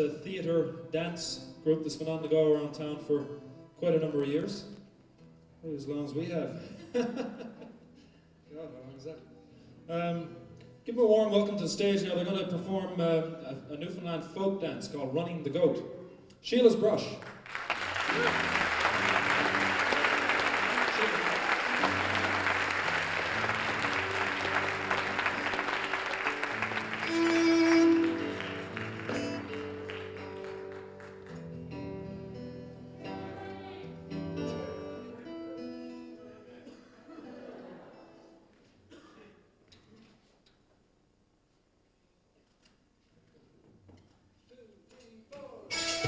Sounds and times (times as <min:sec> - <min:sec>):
Music: 0:00.0 - 0:38.8, 0:44.0 - 0:46.0.